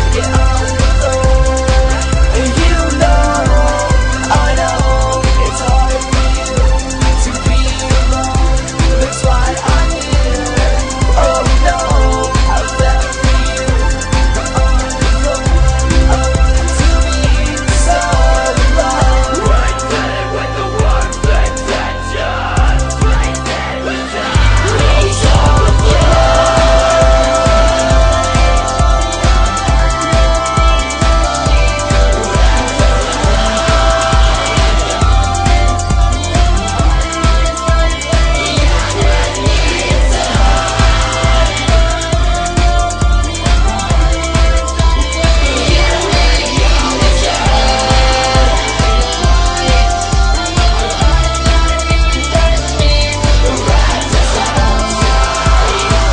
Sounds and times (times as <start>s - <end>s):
Rock music: 0.0s - 56.1s.